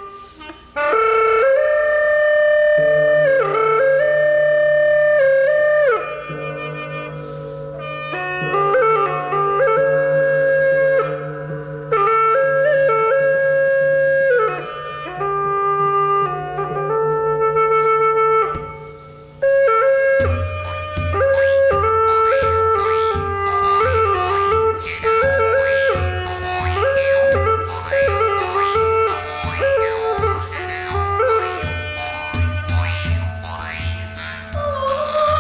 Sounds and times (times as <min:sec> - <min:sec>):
Traditional music: 0:00.0 - 0:35.4.